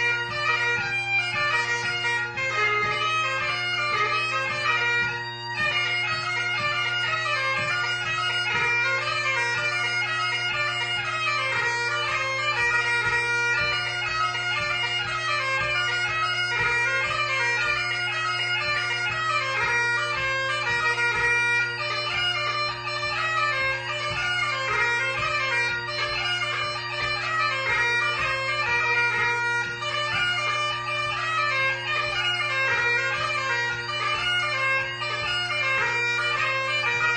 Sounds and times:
Music: 0.0s - 37.1s.

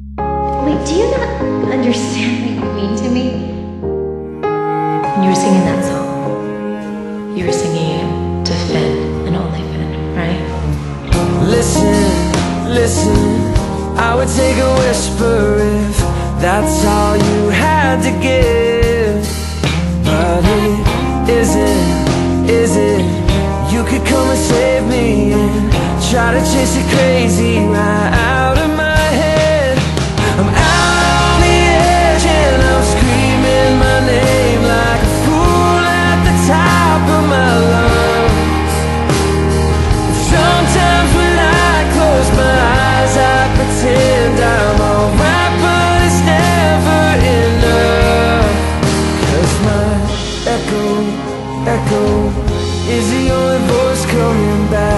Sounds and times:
Music: 0.0s - 54.9s.

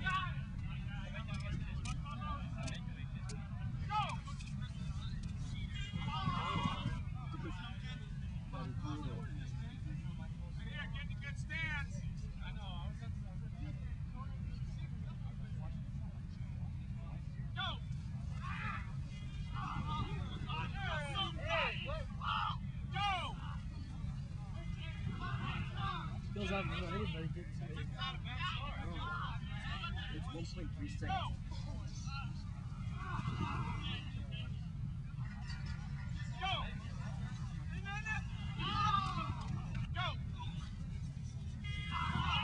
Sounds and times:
Outside, urban or manmade: 0.0s - 42.4s
Speech: 19.5s - 34.6s.

